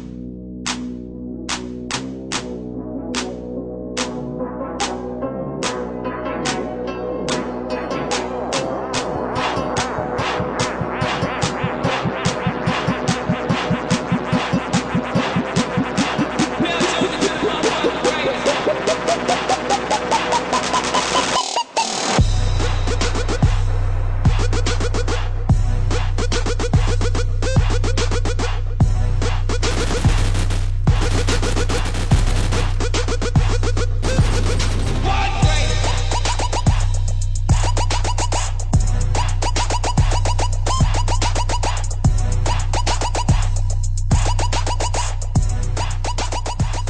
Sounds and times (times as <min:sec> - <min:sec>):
Music: 0:00.0 - 0:46.9
Speech: 0:16.6 - 0:18.5, 0:35.0 - 0:36.0.